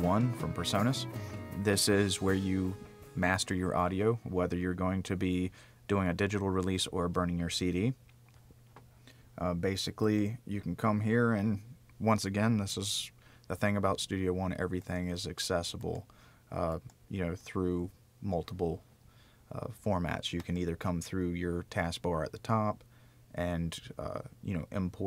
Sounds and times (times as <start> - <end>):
Speech: 0.0 - 8.0, 9.4 - 18.8, 19.5 - 25.0.